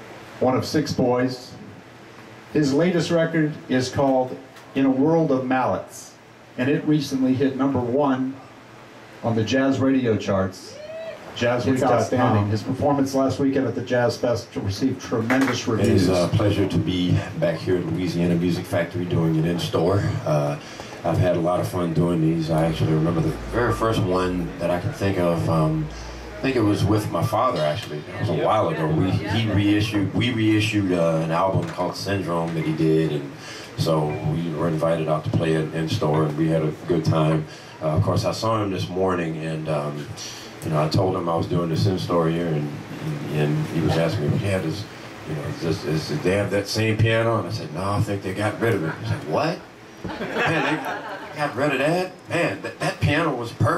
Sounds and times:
Speech: 0.4 - 1.7, 2.5 - 8.6, 9.2 - 10.8, 11.4 - 49.7, 50.4 - 53.7.

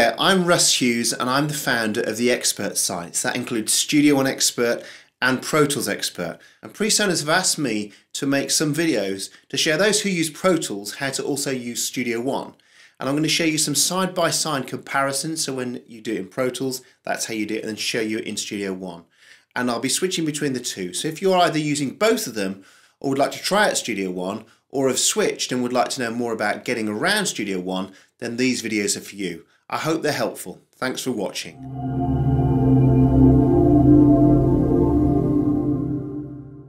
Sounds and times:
Speech: 0.0 - 31.6
Music: 31.6 - 36.6.

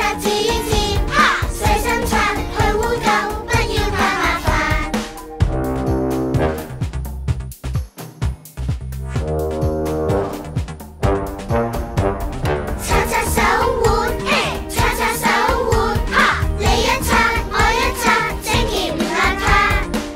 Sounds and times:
Music: 0.0 - 20.1.

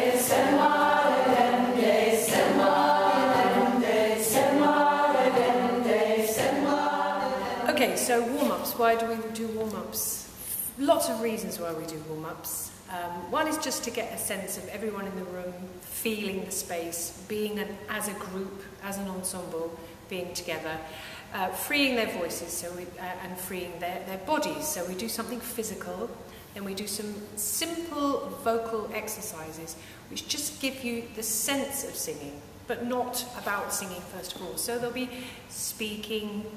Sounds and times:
Speech: 7.4 - 36.5.

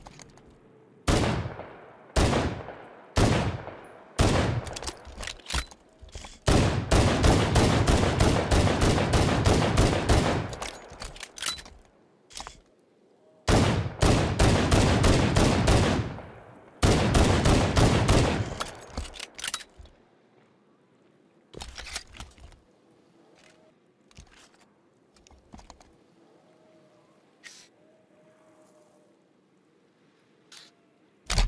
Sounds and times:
Fusillade: 6.5 - 10.6, 13.5 - 16.2, 16.8 - 18.6.

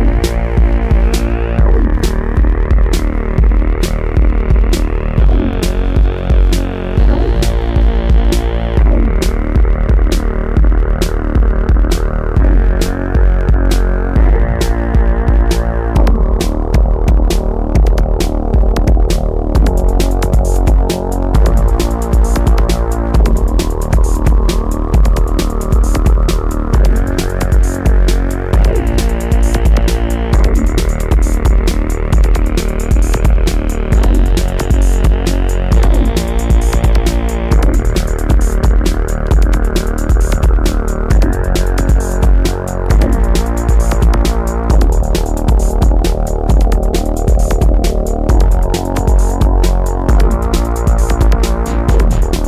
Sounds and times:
Techno: 0.0 - 52.4.

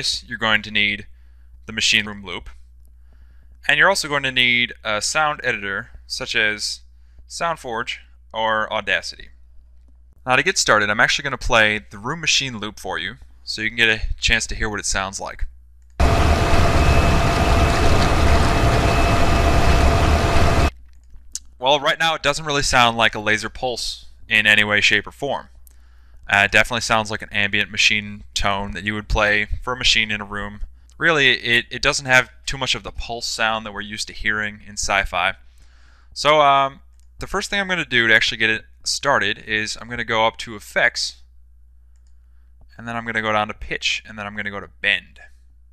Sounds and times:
Speech: 0.0 - 1.1, 1.7 - 2.6, 3.6 - 9.4, 10.2 - 15.5, 21.4 - 25.6, 26.3 - 35.4, 36.2 - 41.3, 42.7 - 45.4.

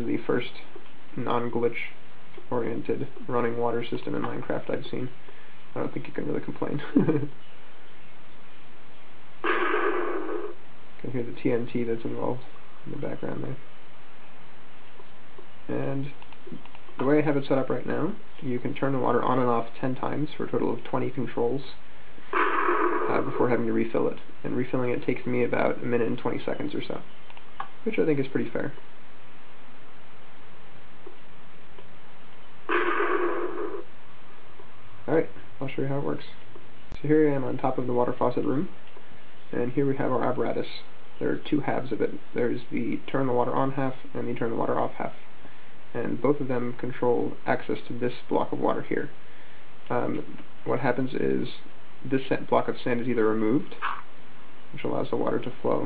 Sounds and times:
Speech: 0.0 - 5.2, 5.8 - 7.4, 11.0 - 13.6, 15.7 - 21.8, 23.1 - 27.1, 27.8 - 28.8, 35.1 - 36.4, 37.0 - 38.8, 39.5 - 45.2, 45.9 - 49.2, 49.9 - 53.8, 54.8 - 55.8.

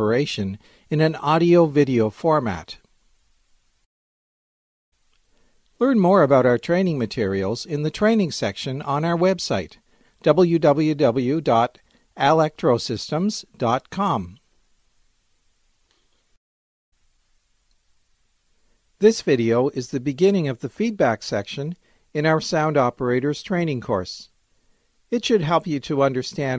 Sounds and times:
Speech: 0.0 - 2.9, 5.8 - 14.5, 19.0 - 24.4, 25.1 - 26.5.

